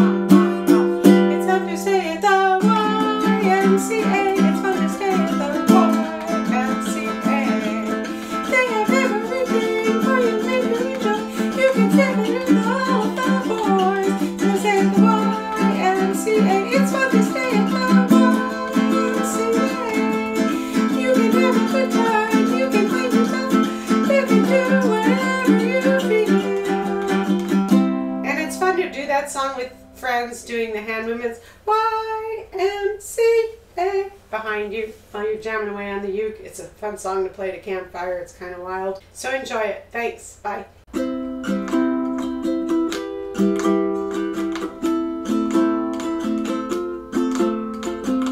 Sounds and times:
Guitar: 0:00.0 - 0:31.1, 0:40.9 - 0:48.3.

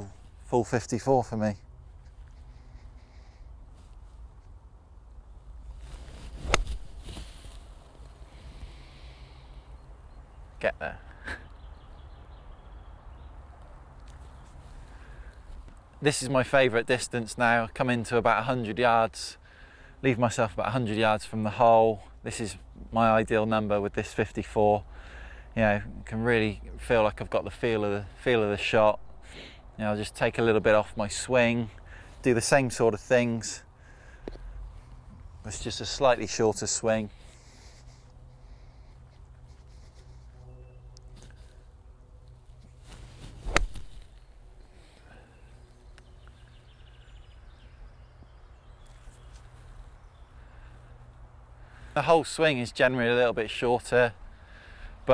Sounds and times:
Speech: 0:00.0 - 0:01.6, 0:10.6 - 0:11.0, 0:16.0 - 0:19.4, 0:20.0 - 0:24.8, 0:25.6 - 0:29.0, 0:29.8 - 0:33.7, 0:35.4 - 0:37.1, 0:52.0 - 0:54.2.

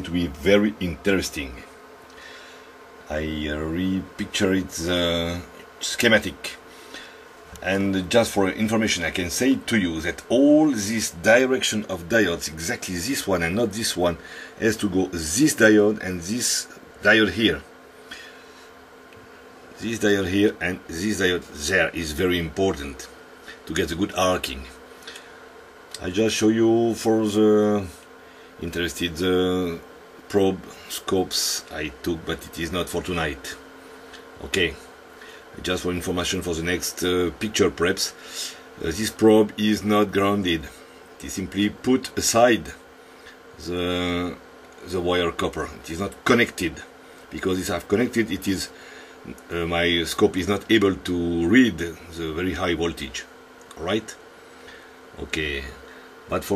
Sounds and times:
Speech: 0:00.0 - 0:01.7, 0:03.1 - 0:06.7, 0:07.6 - 0:17.7, 0:19.8 - 0:24.8, 0:26.0 - 0:33.7, 0:34.4 - 0:34.9, 0:35.5 - 0:42.8, 0:43.6 - 0:54.2, 0:55.1 - 0:56.5.

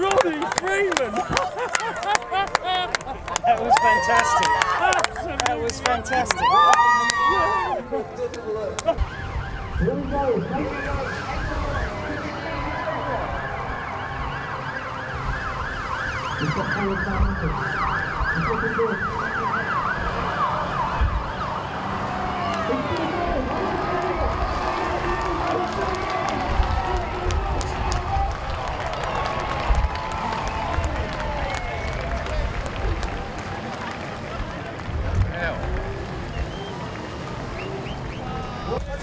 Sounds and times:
Police car (siren): 0:08.7 - 0:34.5.

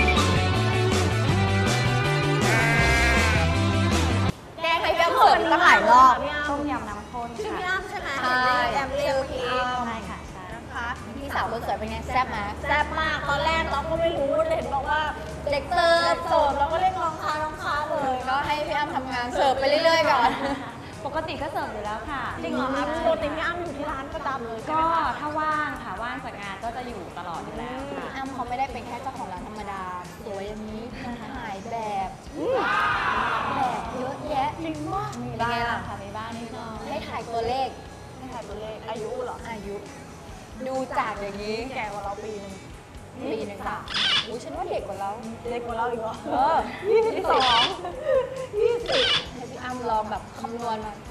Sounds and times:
Music: 0:00.0 - 0:51.1.

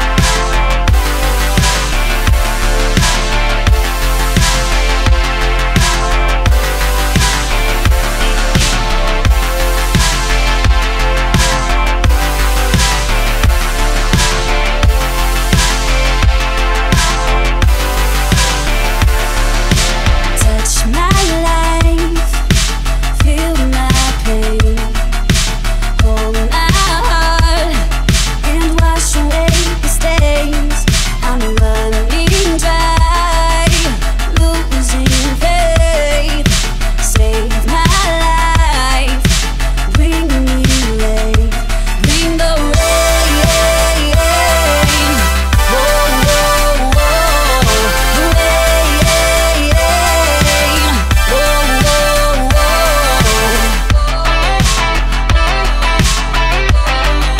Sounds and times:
Music: 0:00.0 - 0:57.4.

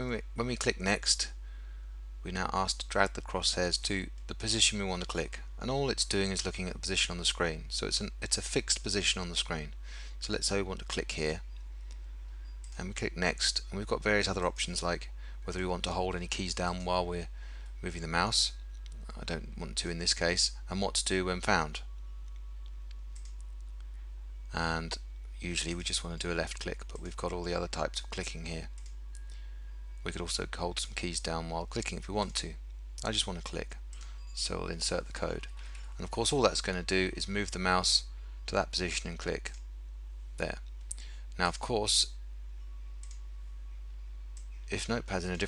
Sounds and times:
Speech: 0:00.0 - 0:01.4, 0:02.2 - 0:11.4, 0:12.8 - 0:21.9, 0:24.5 - 0:28.7, 0:30.0 - 0:33.8, 0:34.4 - 0:39.6, 0:40.4 - 0:40.7, 0:41.4 - 0:42.2, 0:44.7 - 0:45.4.

